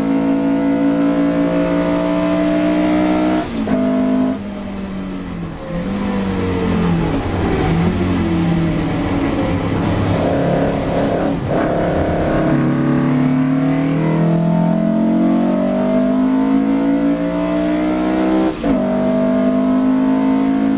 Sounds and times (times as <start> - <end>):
Outside, urban or manmade: 0.0 - 20.7
Race car, auto racing: 0.0 - 20.7.